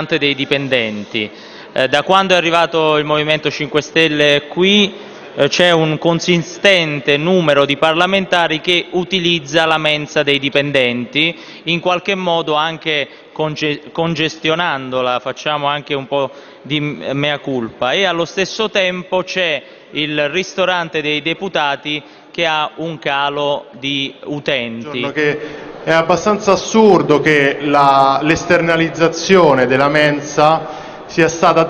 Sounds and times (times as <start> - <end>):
Speech: 0.0 - 31.7.